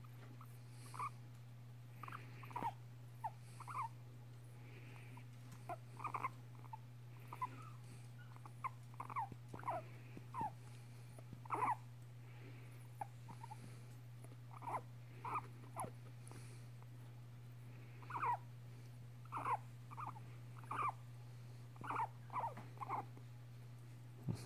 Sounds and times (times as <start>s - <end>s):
Rodents, rats, mice: 0.0s - 1.2s, 1.9s - 4.0s, 4.7s - 16.9s, 17.8s - 18.5s, 19.2s - 21.0s, 21.8s - 23.2s
Domestic animals, pets: 0.0s - 24.4s.